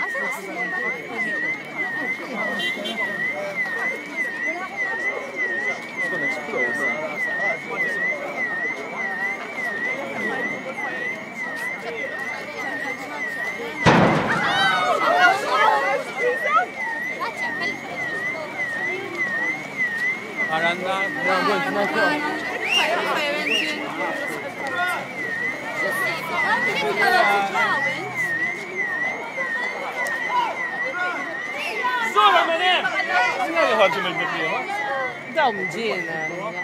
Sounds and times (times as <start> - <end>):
Speech: 0.0 - 13.9, 14.5 - 36.6.